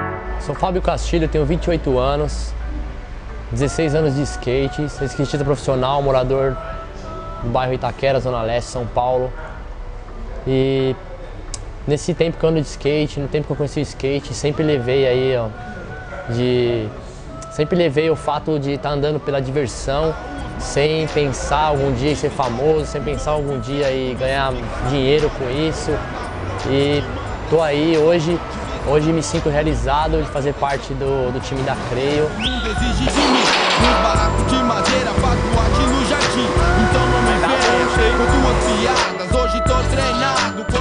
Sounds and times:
Music: 0:00.0 - 0:40.8
Speech: 0:00.4 - 0:02.6, 0:03.5 - 0:06.6, 0:07.4 - 0:09.4, 0:10.4 - 0:11.2, 0:11.9 - 0:15.6, 0:16.3 - 0:26.0, 0:26.6 - 0:32.4, 0:37.2 - 0:39.1.

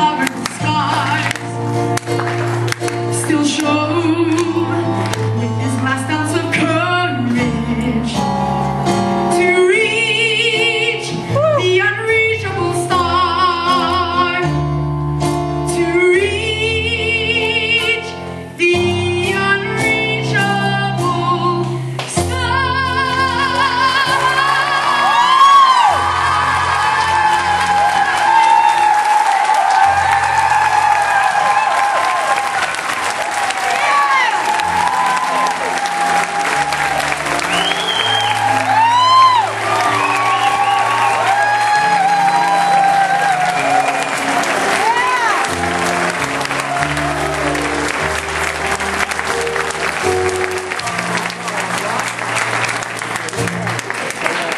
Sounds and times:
Applause: 0:00.0 - 0:05.4, 0:24.4 - 0:54.5
Music: 0:00.0 - 0:54.5.

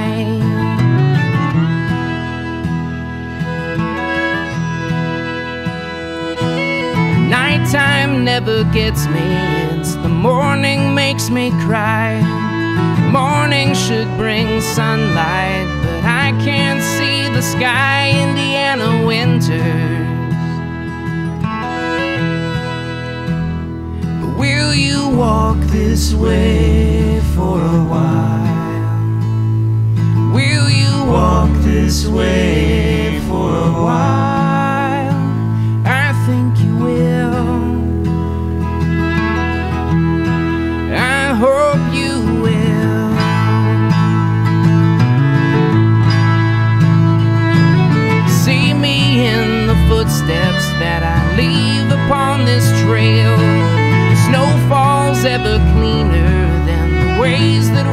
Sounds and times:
Music: 0:00.0 - 0:57.9.

